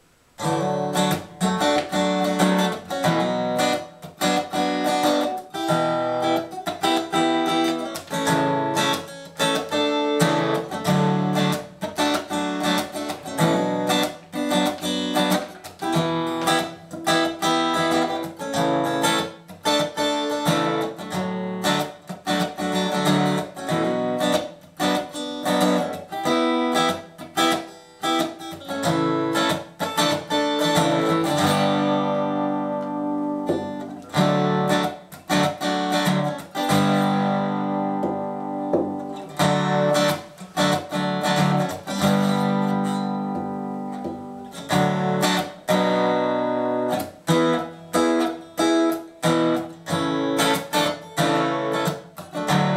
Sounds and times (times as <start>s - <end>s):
Acoustic guitar: 0.0s - 52.7s
Strum: 0.0s - 52.7s.